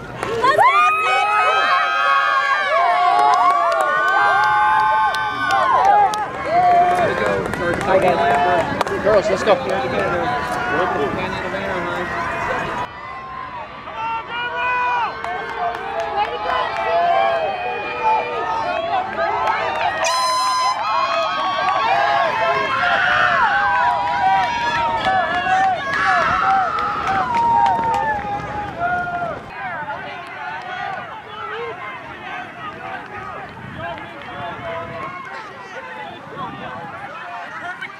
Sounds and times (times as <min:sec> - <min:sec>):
Outside, urban or manmade: 0:00.0 - 0:37.9
Run: 0:00.0 - 0:37.9.